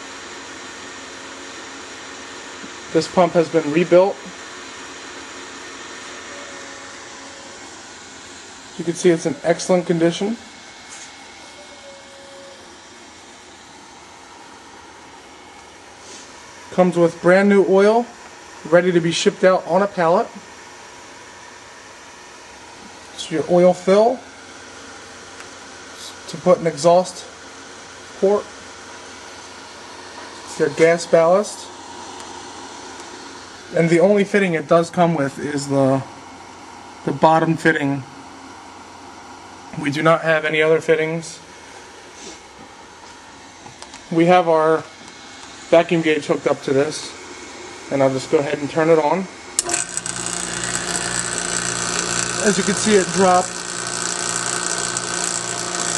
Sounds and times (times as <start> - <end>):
Speech: 2.9 - 4.4, 8.8 - 10.5, 16.7 - 20.4, 23.2 - 24.3, 26.0 - 27.4, 28.2 - 28.5, 30.5 - 31.8, 33.7 - 36.1, 37.0 - 38.1, 39.7 - 41.5, 44.1 - 44.9, 45.7 - 47.2, 47.9 - 49.4, 52.4 - 53.6.